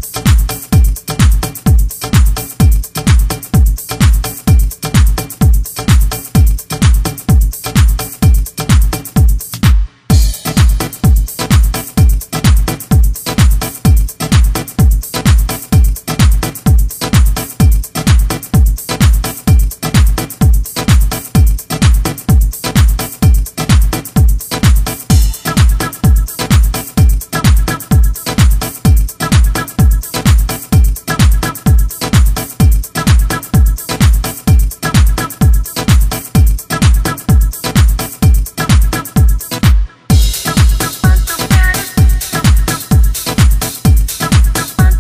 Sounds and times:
House music: 0.0 - 45.0.

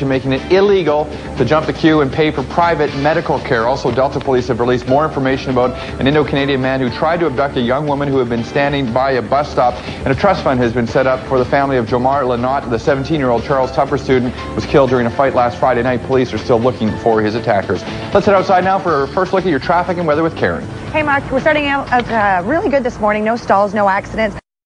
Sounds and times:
Music: 0.0 - 24.4.

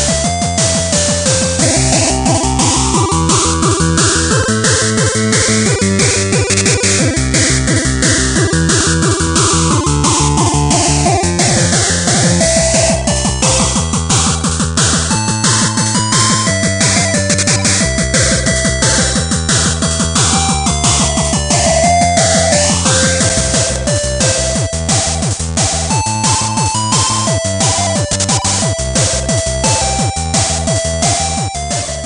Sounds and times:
Music: 0.0 - 32.0.

